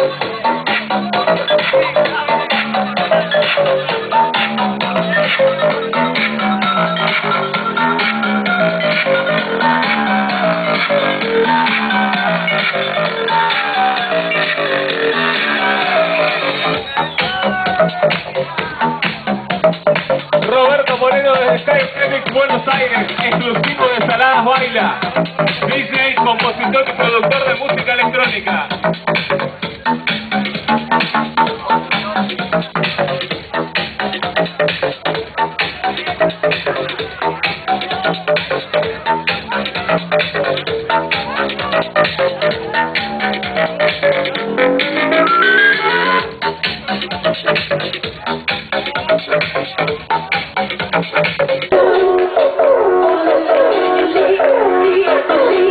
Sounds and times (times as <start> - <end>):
Electronica: 0.0 - 55.7.